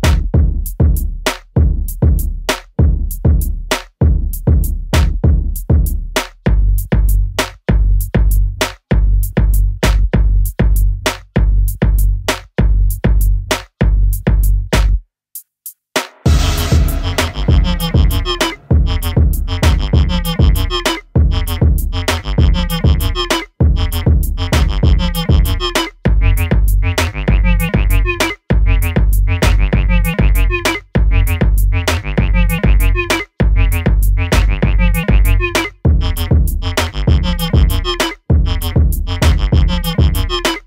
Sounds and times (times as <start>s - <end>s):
Music: 0.0s - 40.6s.